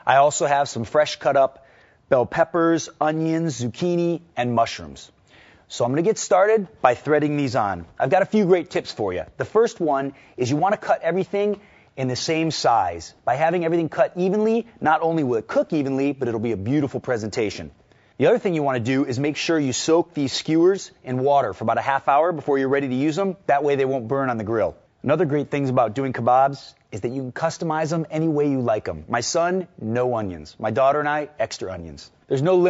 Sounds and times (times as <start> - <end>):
Speech: 0.0 - 32.7.